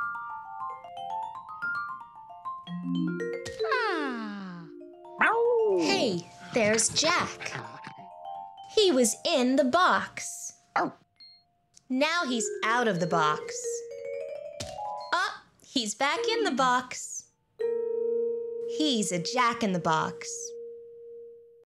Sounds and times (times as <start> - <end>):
Music: 0.0 - 10.2, 12.2 - 15.3, 17.6 - 20.3
Speech: 3.6 - 8.0, 8.8 - 11.0, 11.9 - 13.8, 15.1 - 17.3, 18.8 - 20.5.